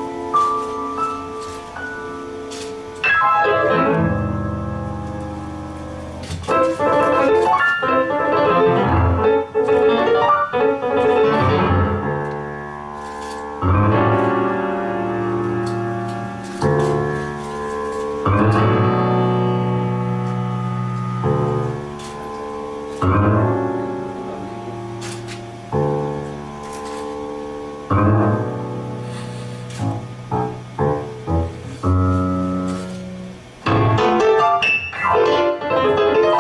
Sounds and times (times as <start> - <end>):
Music: 0.0 - 36.4.